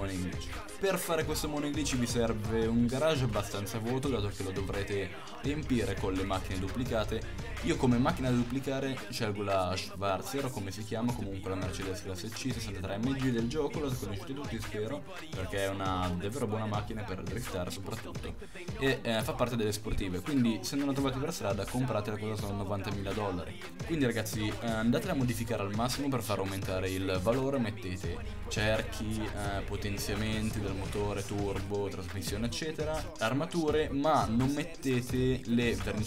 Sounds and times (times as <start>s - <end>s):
Music: 0.0s - 36.0s
Speech: 0.0s - 36.0s.